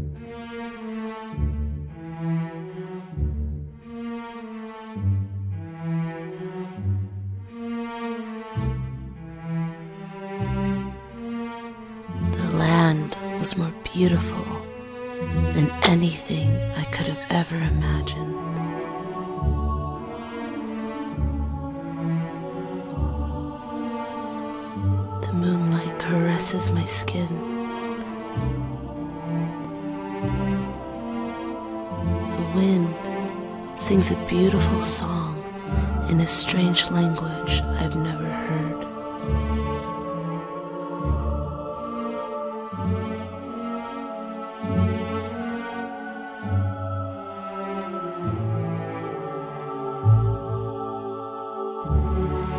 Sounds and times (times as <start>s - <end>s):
Music: 0.0s - 52.5s
Speech: 12.4s - 14.7s, 15.5s - 18.4s, 25.2s - 27.4s, 32.4s - 33.0s, 33.8s - 35.4s, 36.0s - 38.9s.